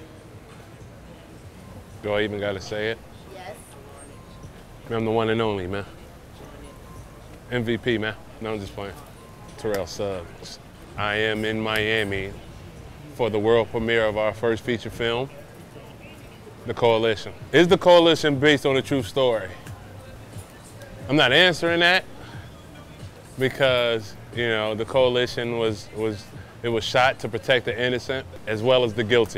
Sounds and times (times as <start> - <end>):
Music: 0.0 - 29.3
Speech: 23.4 - 29.3.